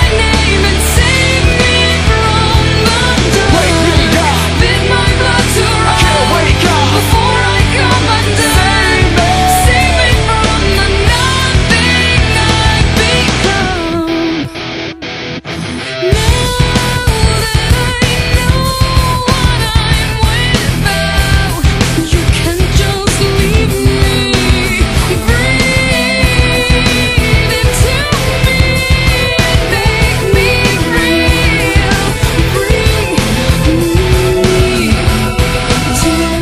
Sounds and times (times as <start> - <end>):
Music: 0.0 - 36.4.